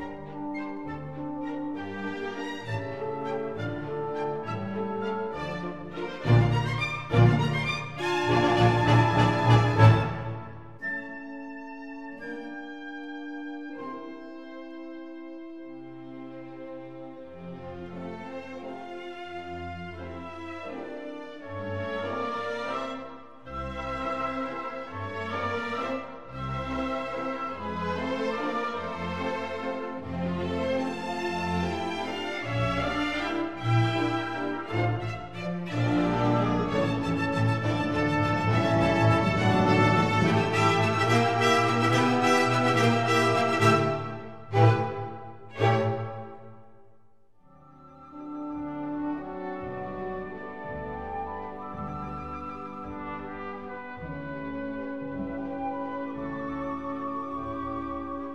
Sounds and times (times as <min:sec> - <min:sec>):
Trumpet: 0:00.0 - 0:14.4, 0:19.5 - 0:46.7, 0:47.5 - 0:58.3.